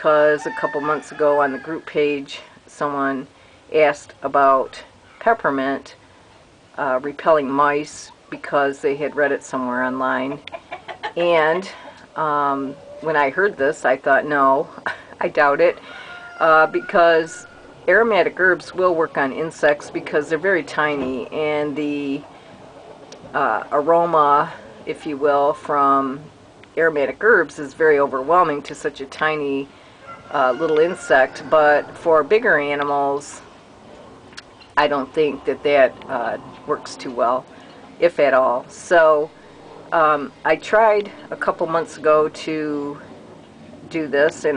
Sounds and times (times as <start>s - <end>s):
Speech: 0.0s - 6.0s, 6.8s - 10.4s, 11.2s - 15.8s, 16.4s - 22.2s, 23.2s - 29.7s, 30.3s - 33.4s, 34.8s - 39.4s, 40.0s - 43.1s, 43.9s - 44.5s.